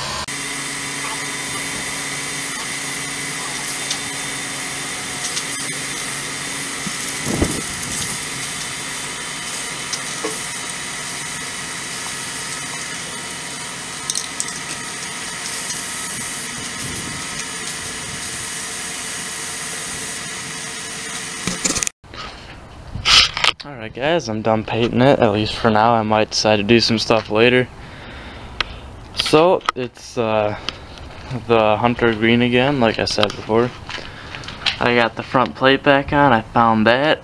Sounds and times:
Spray: 1.0 - 13.1, 15.3 - 21.7.

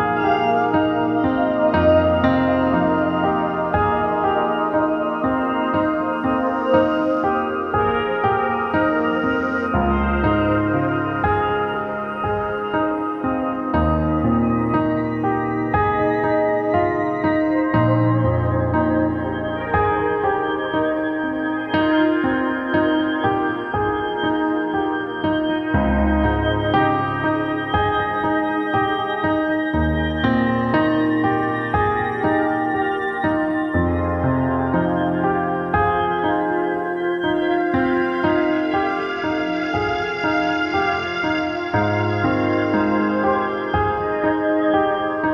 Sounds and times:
Ambient music: 0.0 - 45.3
New-age music: 0.0 - 45.3.

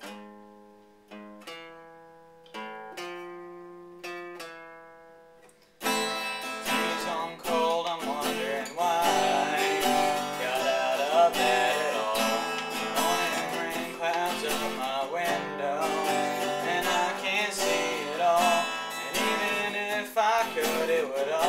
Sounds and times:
Acoustic guitar: 0.0 - 21.4.

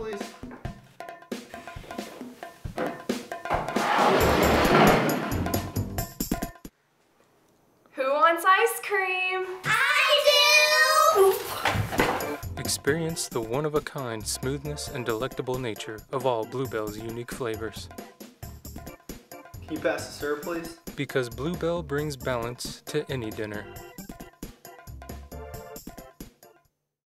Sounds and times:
Speech: 12.6 - 17.9, 19.7 - 23.7.

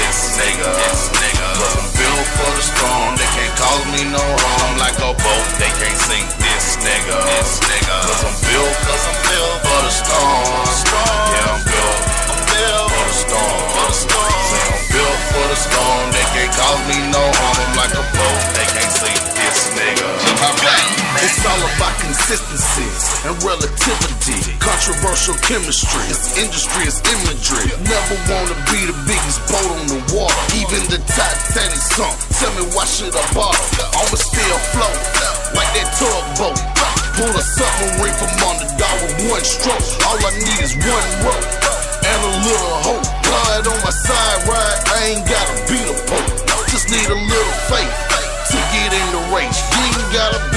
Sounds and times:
Music: 0.0 - 50.5.

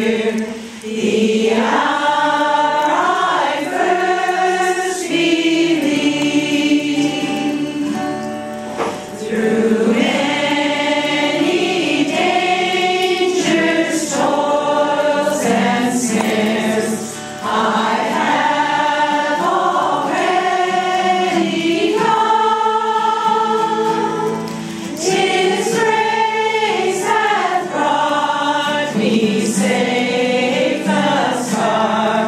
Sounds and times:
Choir: 0.0 - 32.2
Gospel music: 0.0 - 32.2.

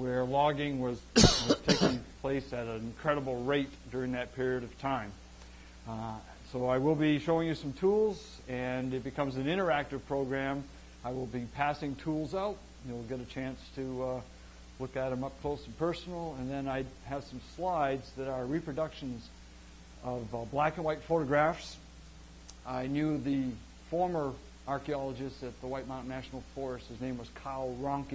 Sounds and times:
Speech: 0.0 - 5.2, 5.9 - 19.3, 20.0 - 21.9, 22.6 - 28.1.

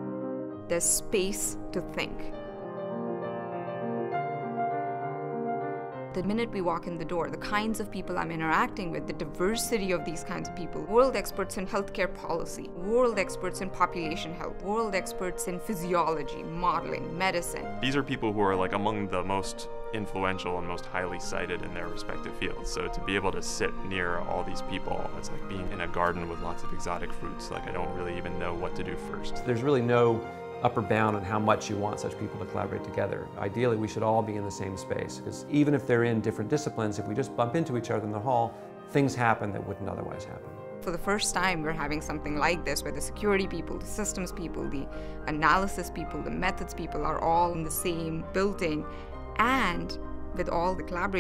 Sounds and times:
Music: 0.0 - 51.2
Speech: 17.4 - 40.4.

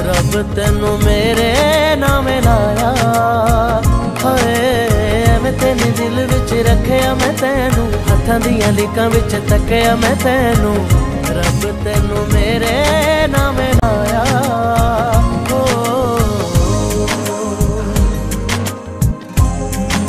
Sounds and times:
Music of Bollywood: 0.0 - 20.0.

